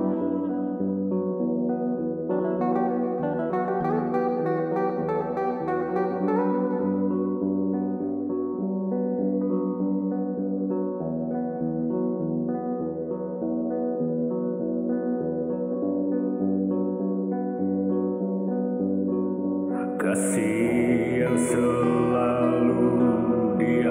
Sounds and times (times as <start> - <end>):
Music: 0.0 - 23.9.